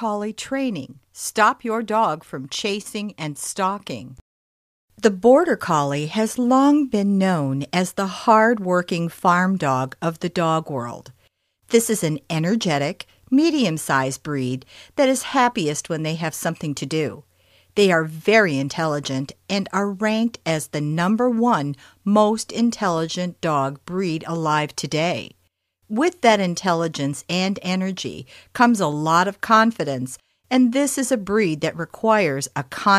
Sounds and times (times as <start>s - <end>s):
Speech: 0.0s - 4.2s, 5.0s - 17.2s, 17.8s - 32.9s.